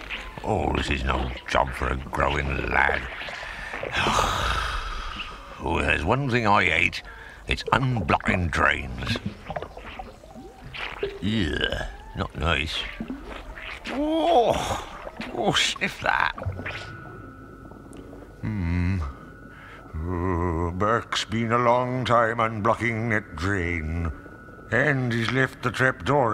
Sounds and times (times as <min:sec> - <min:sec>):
Speech: 0:00.4 - 0:03.2, 0:05.6 - 0:09.3, 0:11.2 - 0:13.0, 0:13.9 - 0:16.4.